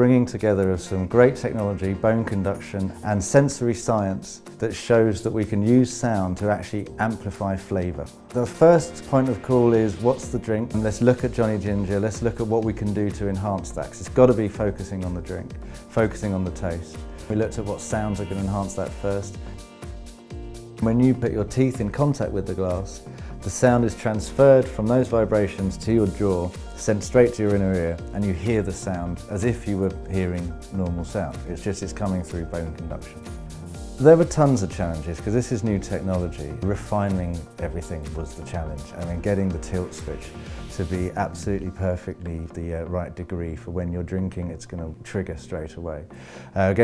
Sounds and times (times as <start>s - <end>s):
Speech: 0.0s - 19.4s, 20.8s - 33.2s, 34.0s - 46.8s
Music: 0.0s - 46.8s.